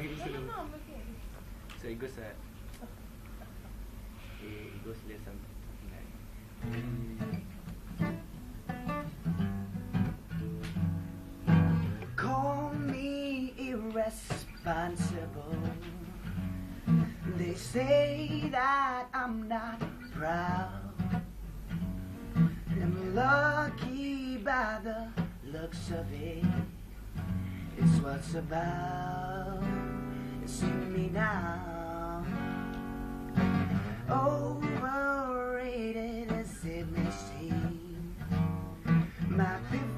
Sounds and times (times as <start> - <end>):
Music: 6.6 - 39.9
Male singing: 12.1 - 16.2, 17.0 - 21.2, 22.7 - 26.7, 27.8 - 32.6, 34.0 - 38.3, 39.2 - 39.9.